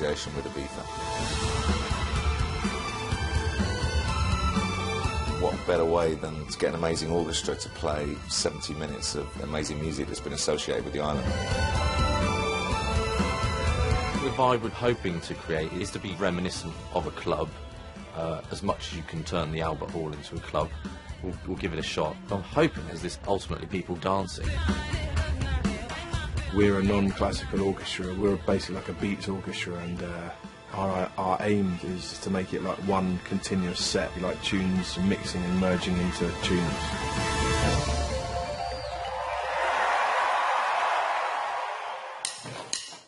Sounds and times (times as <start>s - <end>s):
Speech: 0.0s - 0.9s, 5.4s - 11.2s, 14.2s - 17.5s, 18.2s - 24.5s, 26.5s - 36.9s.